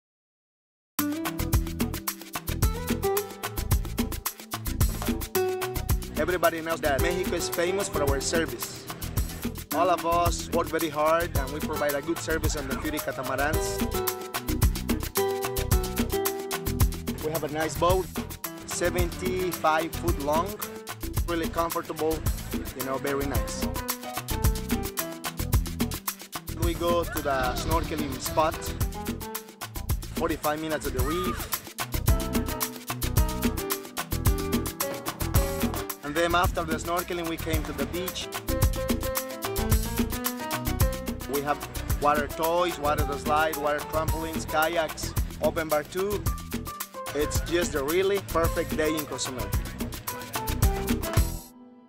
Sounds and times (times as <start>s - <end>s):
Music: 1.0s - 51.8s
Speech: 6.2s - 8.9s, 9.7s - 13.9s, 17.2s - 18.1s, 18.7s - 20.6s, 21.3s - 23.8s, 26.6s - 28.8s, 30.2s - 31.5s, 36.0s - 38.3s, 41.3s - 46.3s, 47.1s - 49.6s.